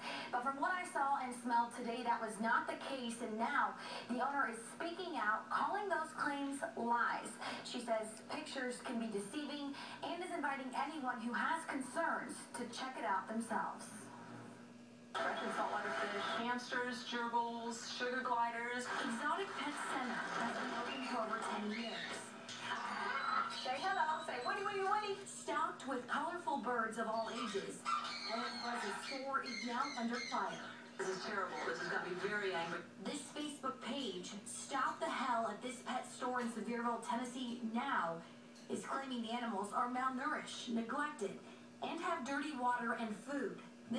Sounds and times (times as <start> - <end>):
Domestic animals, pets: 27.1 - 30.8.